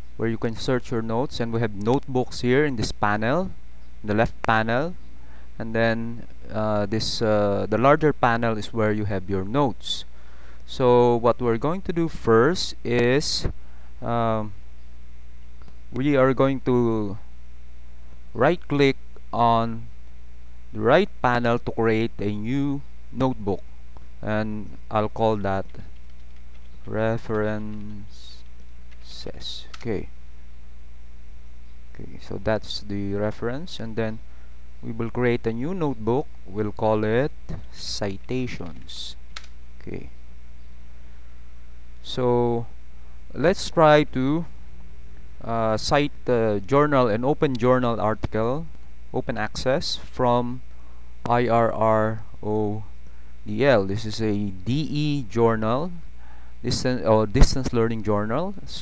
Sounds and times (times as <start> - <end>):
Speech: 0.2 - 5.0, 5.6 - 10.1, 10.7 - 14.6, 16.0 - 17.2, 18.4 - 19.9, 20.8 - 23.6, 24.2 - 25.9, 26.9 - 28.4, 29.0 - 30.1, 32.0 - 34.2, 34.8 - 39.2, 39.8 - 40.2, 42.0 - 42.7, 43.3 - 44.5, 45.4 - 50.6, 51.3 - 52.9, 53.5 - 56.0, 56.6 - 58.8.